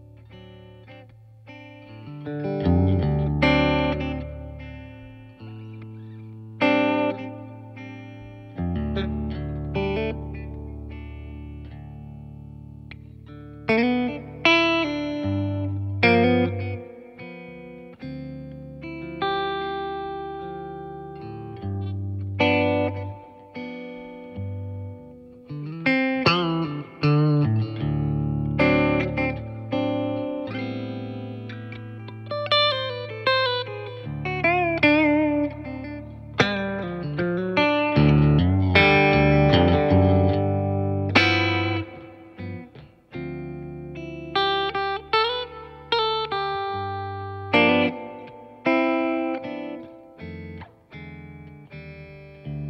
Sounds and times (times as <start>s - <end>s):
Music: 0.0s - 52.6s.